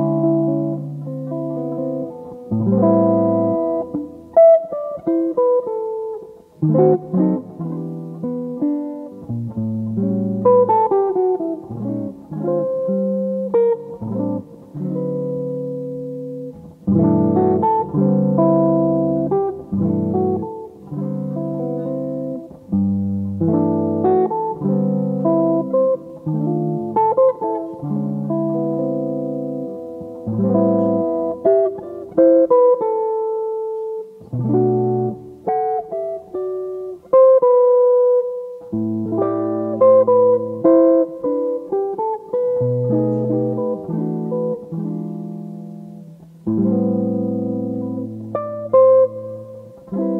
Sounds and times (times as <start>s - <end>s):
Music: 0.0s - 50.1s.